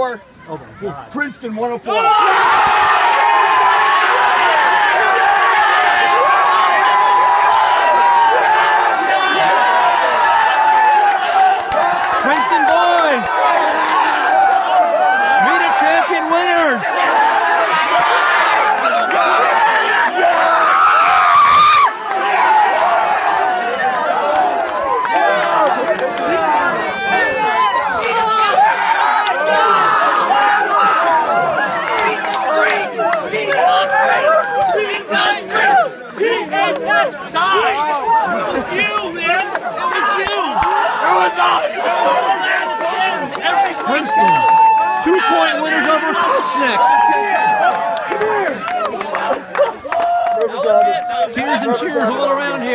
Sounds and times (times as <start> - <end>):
Crowd: 0.0 - 52.7.